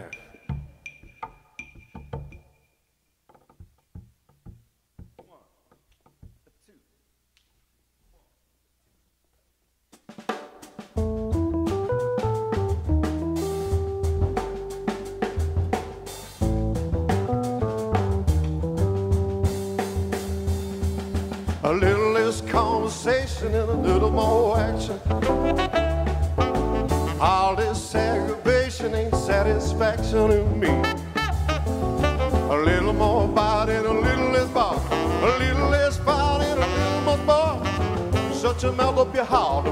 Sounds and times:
Jazz: 0:10.0 - 0:39.7.

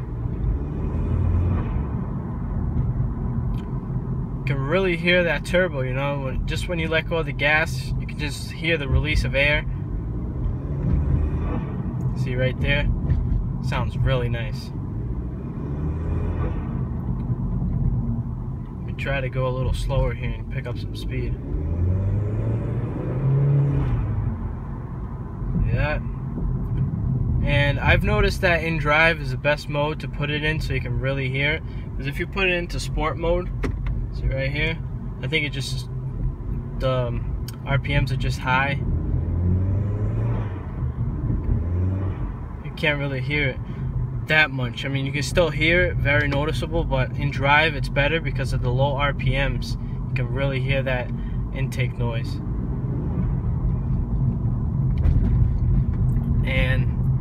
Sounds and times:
Speech: 0:04.5 - 0:09.7, 0:12.2 - 0:12.9, 0:13.7 - 0:14.7, 0:18.9 - 0:21.4, 0:25.6 - 0:26.0, 0:27.4 - 0:33.5, 0:34.2 - 0:35.9, 0:36.8 - 0:38.8, 0:42.7 - 0:43.6, 0:44.3 - 0:52.4, 0:56.4 - 0:56.9.

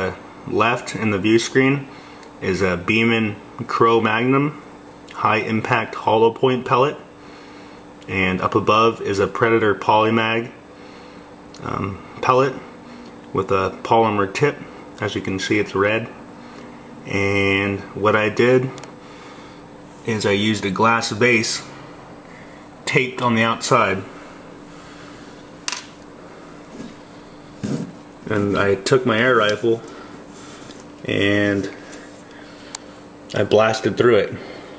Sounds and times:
Speech: 0:00.0 - 0:07.1, 0:08.1 - 0:10.6, 0:11.6 - 0:12.7, 0:13.3 - 0:16.2, 0:17.0 - 0:18.8, 0:20.0 - 0:21.7, 0:22.8 - 0:24.1, 0:28.2 - 0:29.9, 0:31.0 - 0:31.8, 0:33.3 - 0:34.5.

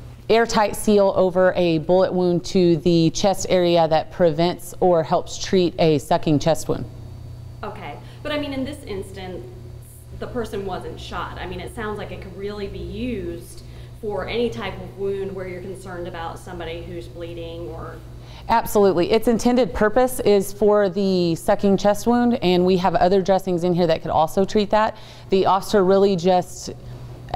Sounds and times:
Speech: 0:07.6 - 0:09.6, 0:10.2 - 0:27.3.

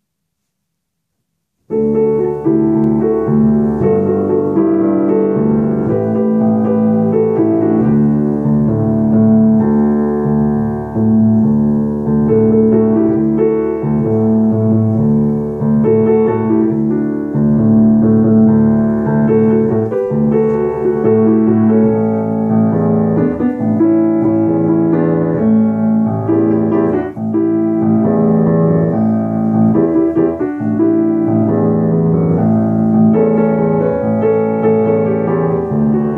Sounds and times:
Music: 0:01.7 - 0:36.1.

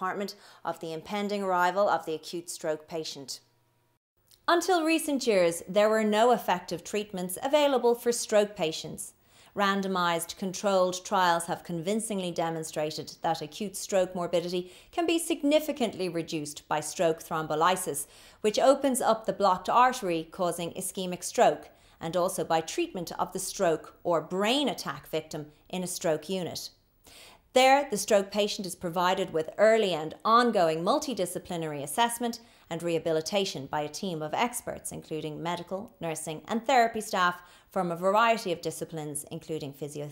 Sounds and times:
Speech: 0:00.0 - 0:03.4, 0:04.4 - 0:26.7, 0:27.6 - 0:40.1.

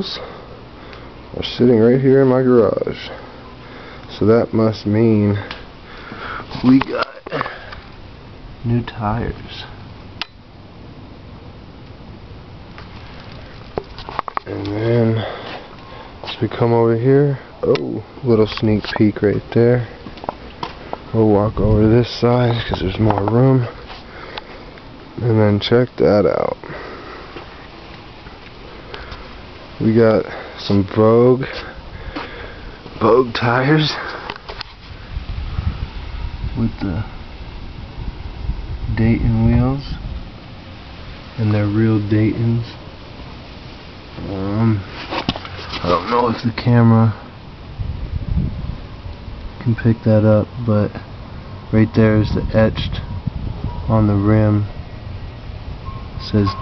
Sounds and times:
Speech: 0:00.0 - 0:00.3, 0:01.3 - 0:03.2, 0:04.1 - 0:05.5, 0:06.5 - 0:07.5, 0:08.6 - 0:09.8, 0:14.4 - 0:15.4, 0:16.2 - 0:20.0, 0:21.1 - 0:23.8, 0:25.2 - 0:26.7, 0:29.8 - 0:31.7, 0:33.0 - 0:34.1, 0:36.6 - 0:37.1, 0:38.9 - 0:40.0, 0:41.4 - 0:42.8, 0:44.2 - 0:44.9, 0:45.8 - 0:47.3, 0:49.6 - 0:51.0, 0:51.7 - 0:53.0, 0:53.9 - 0:54.7, 0:56.2 - 0:56.6.

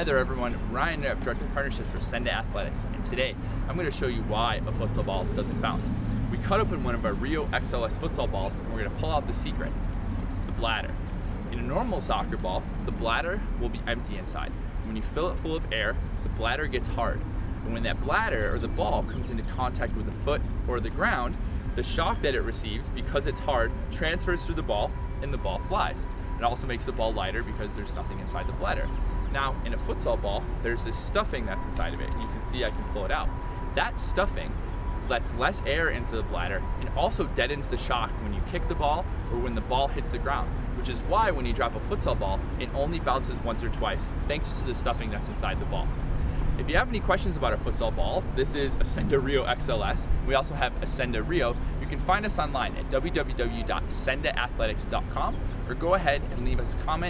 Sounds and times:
Speech: 0:00.0 - 0:09.8, 0:10.5 - 0:46.0, 0:46.6 - 0:57.1.

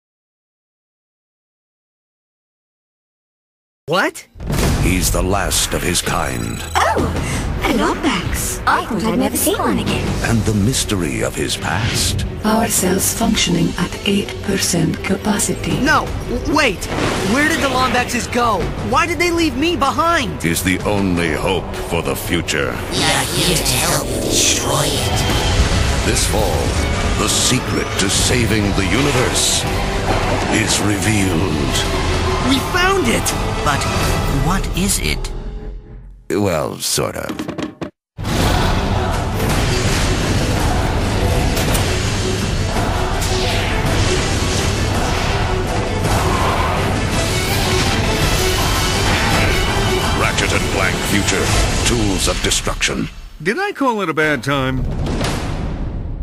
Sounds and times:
Speech: 0:03.9 - 0:07.0, 0:17.4 - 0:25.2, 0:26.1 - 0:29.6, 0:30.5 - 0:31.9, 0:36.3 - 0:37.4, 0:50.2 - 0:54.8
Music: 0:04.3 - 0:53.4.

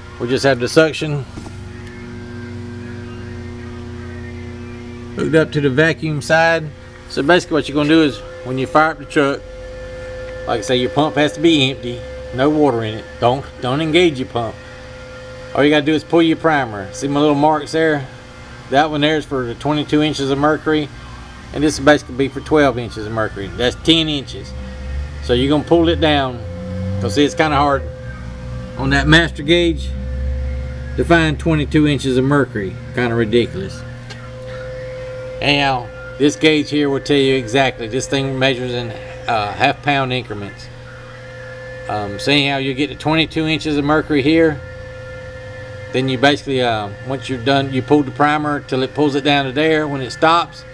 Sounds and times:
Speech: 0:00.2 - 0:01.3, 0:05.2 - 0:09.4, 0:10.5 - 0:14.6, 0:15.6 - 0:18.1, 0:18.7 - 0:20.9, 0:21.5 - 0:24.6, 0:25.2 - 0:26.4, 0:27.0 - 0:27.9, 0:28.8 - 0:30.0, 0:31.0 - 0:33.8, 0:35.4 - 0:40.7, 0:41.9 - 0:44.6, 0:46.0 - 0:50.7.

